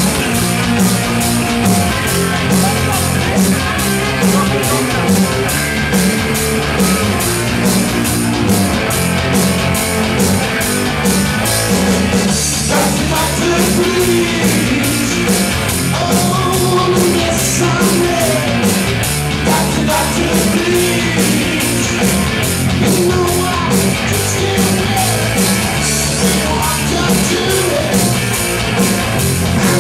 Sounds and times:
Music: 0:00.0 - 0:29.8.

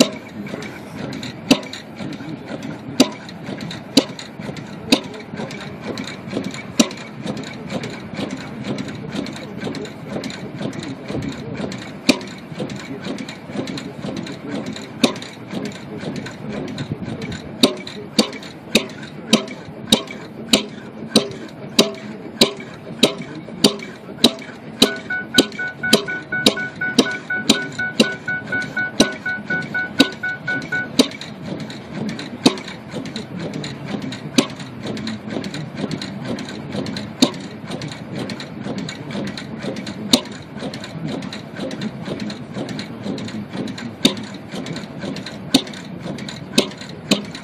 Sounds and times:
Heavy engine (low frequency): 0:00.0 - 0:47.4.

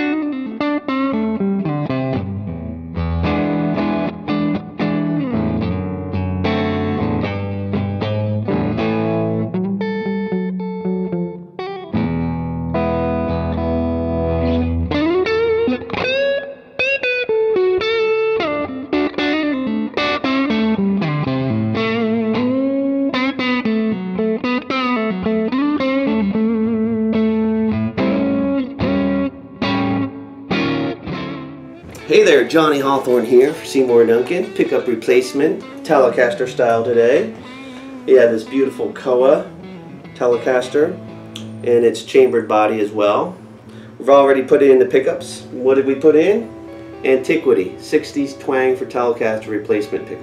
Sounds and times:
Music: 0:00.0 - 0:50.2.

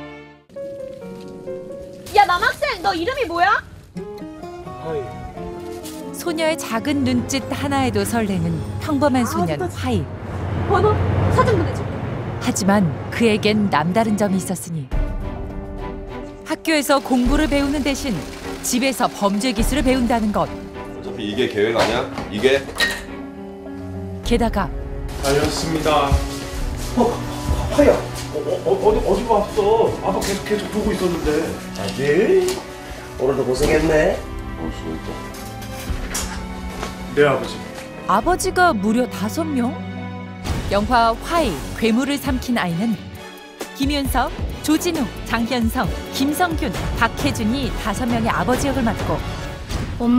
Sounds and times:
Music: 0:00.0 - 0:50.1.

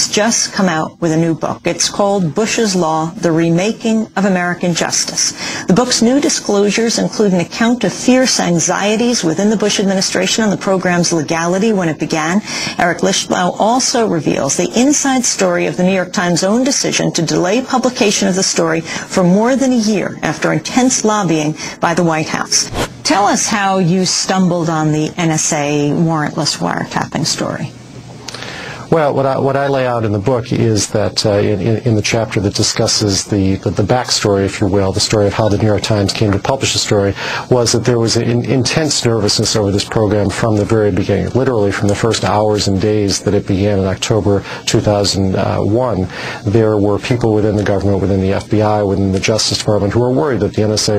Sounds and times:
Speech: 0:00.0 - 0:27.7, 0:28.9 - 0:50.9.

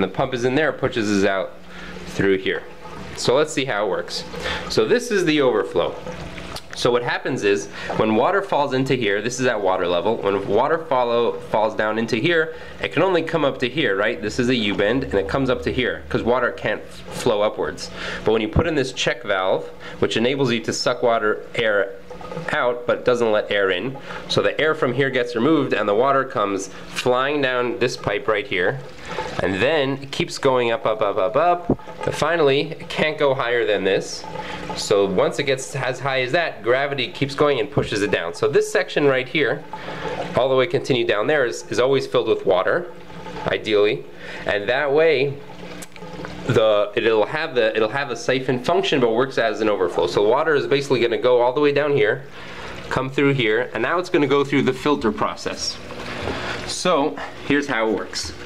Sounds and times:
Speech: 0:00.0 - 0:01.6, 0:02.2 - 0:06.0, 0:06.7 - 0:39.7, 0:40.4 - 0:45.4, 0:46.5 - 0:52.3, 0:52.9 - 0:55.8, 0:56.7 - 0:58.4.

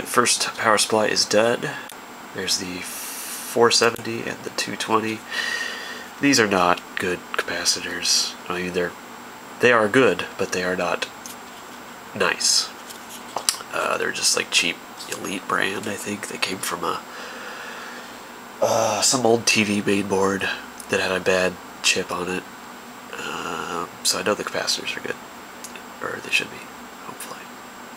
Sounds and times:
Speech: 0:00.0 - 0:05.3, 0:06.2 - 0:09.0, 0:09.6 - 0:11.1, 0:12.1 - 0:12.8, 0:13.5 - 0:17.1, 0:18.6 - 0:22.5, 0:23.1 - 0:27.5
Inside, small room: 0:00.0 - 0:27.9.

